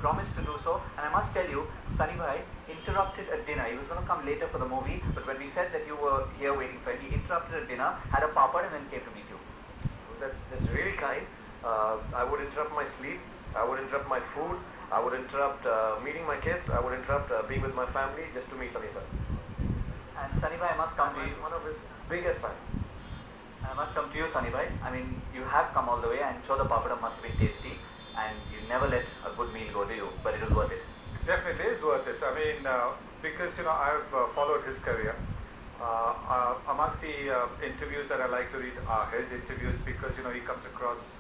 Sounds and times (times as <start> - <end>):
Speech: 0.0 - 9.5, 10.1 - 19.2, 20.2 - 22.7, 23.6 - 41.2.